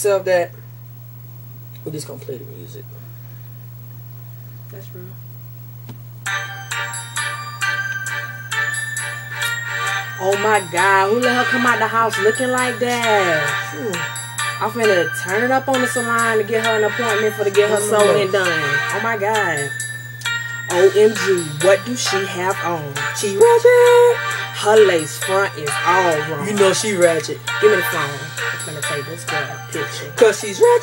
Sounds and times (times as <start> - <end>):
Speech: 1.8 - 2.9, 4.7 - 5.2, 14.6 - 19.7, 20.7 - 30.8
Music: 6.2 - 30.8.